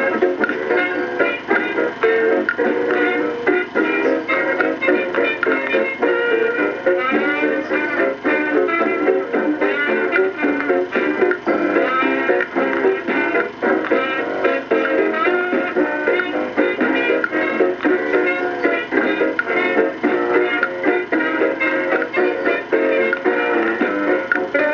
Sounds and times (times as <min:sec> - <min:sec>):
Music: 0:00.0 - 0:24.7.